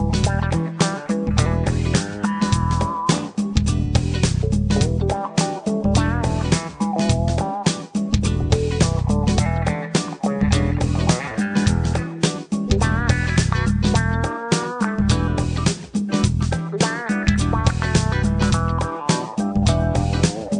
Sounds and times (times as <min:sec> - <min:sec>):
Music: 0:00.0 - 0:20.5.